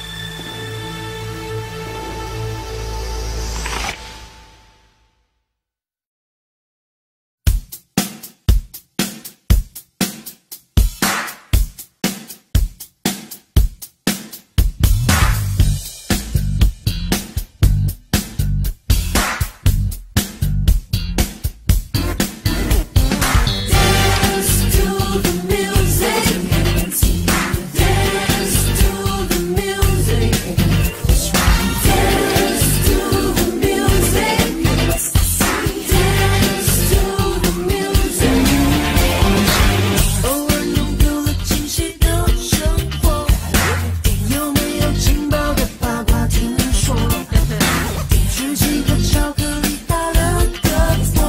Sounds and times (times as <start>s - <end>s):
Dance music: 22.0s - 51.2s.